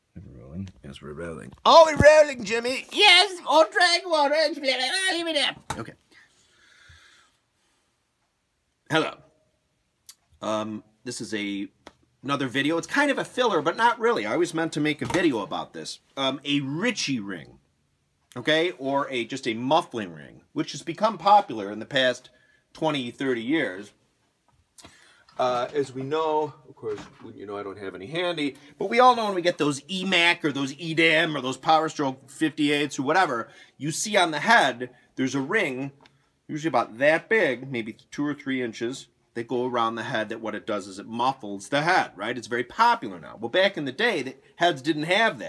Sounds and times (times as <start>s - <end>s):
Speech: 0.1s - 6.0s, 8.9s - 9.3s, 10.4s - 17.6s, 18.3s - 24.0s, 25.4s - 45.4s.